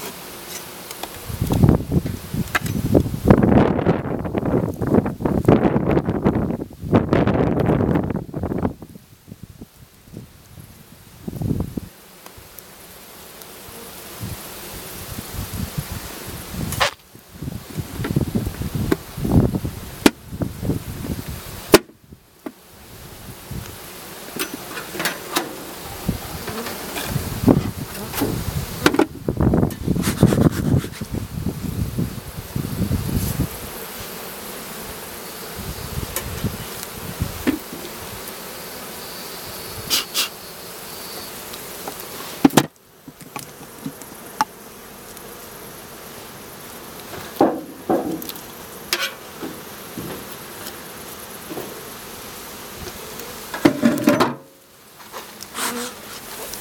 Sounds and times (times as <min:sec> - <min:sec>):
Bee, wasp, etc.: 0:00.0 - 0:56.6.